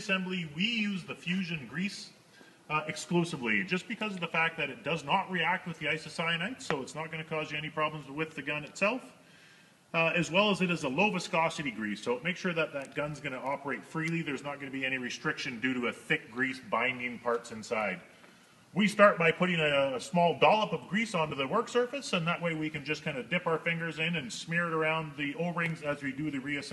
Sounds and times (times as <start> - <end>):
Speech: 0.0 - 9.2, 9.9 - 18.1, 18.8 - 26.7.